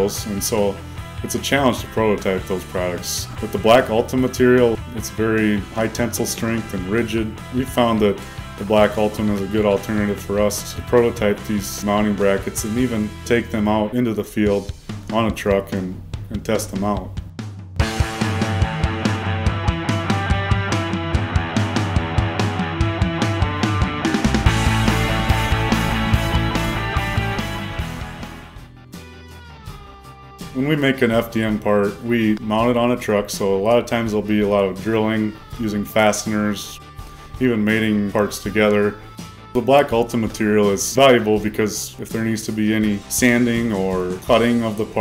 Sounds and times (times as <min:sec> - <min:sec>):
Speech: 0:00.0 - 0:17.2, 0:30.6 - 0:36.8, 0:37.4 - 0:39.0, 0:39.6 - 0:45.0
Music: 0:00.0 - 0:45.0.